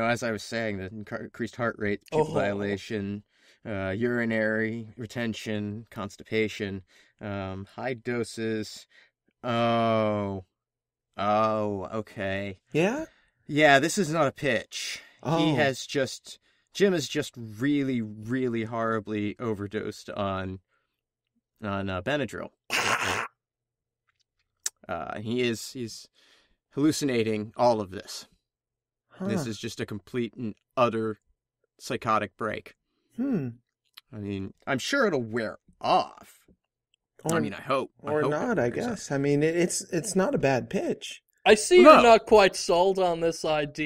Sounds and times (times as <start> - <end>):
Speech: 0.0 - 8.9, 9.5 - 10.5, 11.2 - 20.6, 21.6 - 22.6, 24.7 - 26.1, 26.8 - 28.3, 29.2 - 31.2, 31.8 - 36.4, 37.3 - 43.8.